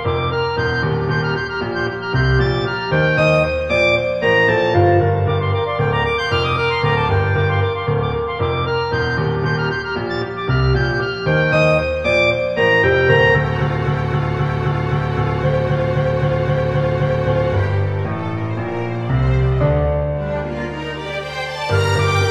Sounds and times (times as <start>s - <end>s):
Theme music: 0.1s - 22.3s.